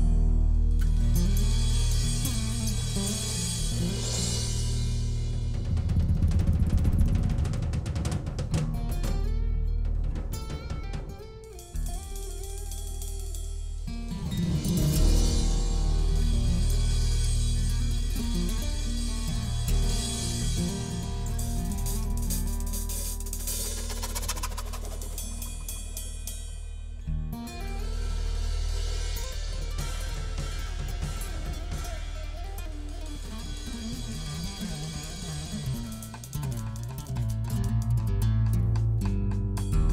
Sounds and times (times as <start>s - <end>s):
Drum kit: 0.0s - 39.9s.